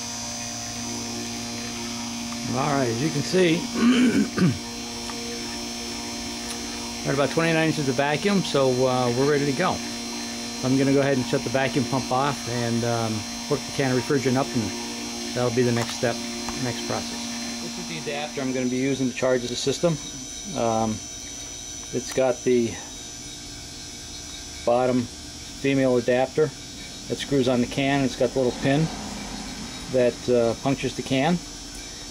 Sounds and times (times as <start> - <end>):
Speech: 0.7 - 3.7, 7.0 - 9.9, 10.6 - 21.0, 22.0 - 22.9, 27.1 - 28.9, 29.9 - 31.4.